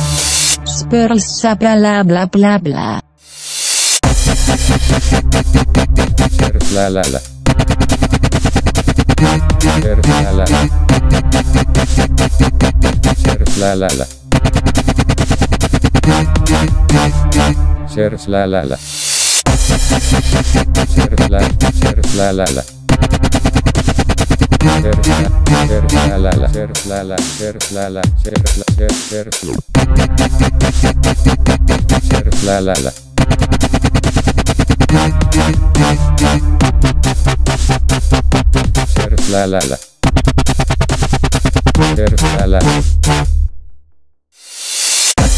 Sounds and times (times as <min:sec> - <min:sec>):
Dubstep: 0:00.0 - 0:01.2, 0:03.2 - 0:17.6, 0:18.6 - 0:43.3, 0:44.4 - 0:45.3.